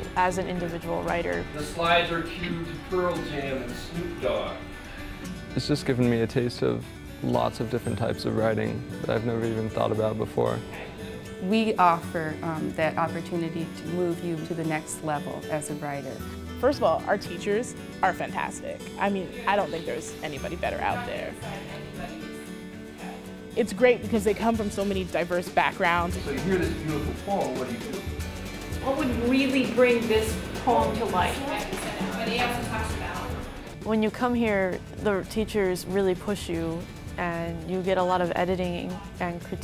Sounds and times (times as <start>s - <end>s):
Music: 0.0s - 39.6s.